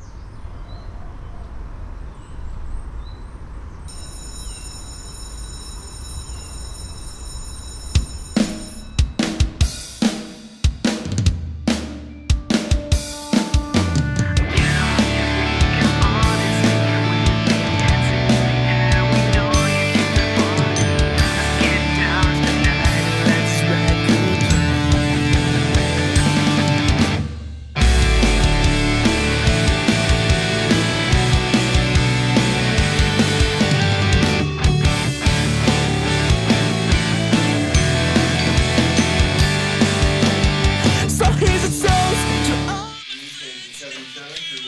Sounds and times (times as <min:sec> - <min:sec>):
Exciting music: 0:07.8 - 0:42.9.